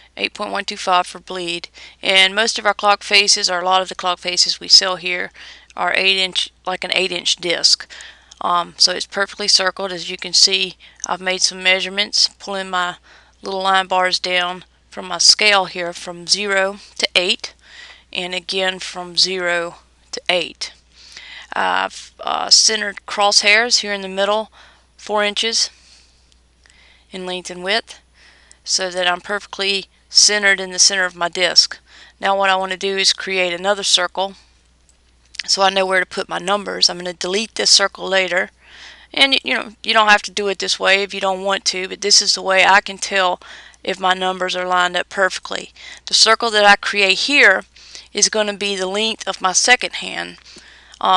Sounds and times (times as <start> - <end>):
Speech: 0.2 - 20.8, 21.5 - 25.8, 27.1 - 28.0, 28.7 - 34.4, 35.4 - 38.5, 39.1 - 50.4.